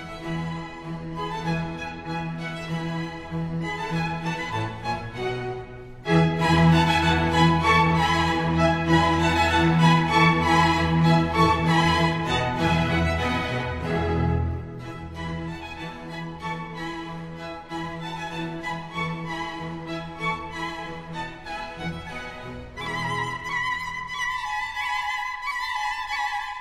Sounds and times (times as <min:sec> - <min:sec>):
Wedding music: 0:03.9 - 0:24.3.